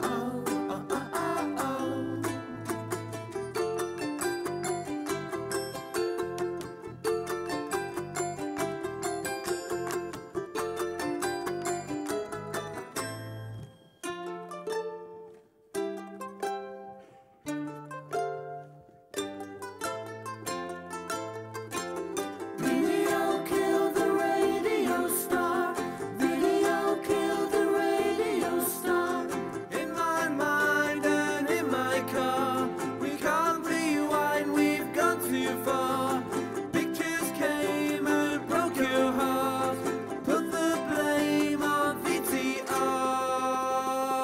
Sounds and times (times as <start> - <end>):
Singing: 0.0 - 2.6, 22.6 - 44.2
Ukulele: 0.0 - 44.2.